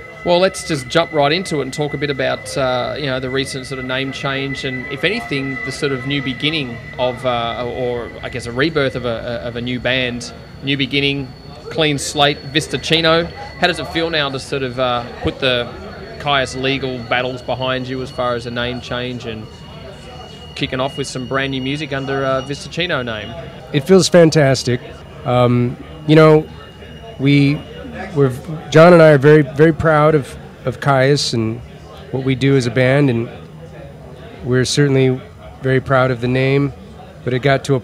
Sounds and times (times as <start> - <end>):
Speech: 0.2 - 19.5, 20.1 - 37.8.